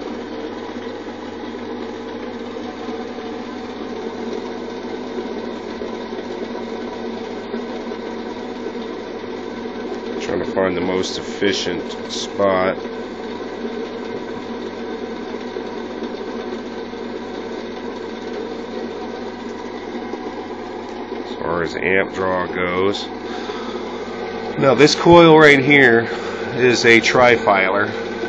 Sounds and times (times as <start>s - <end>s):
Speech: 10.2s - 12.8s, 21.3s - 23.1s, 24.6s - 28.0s.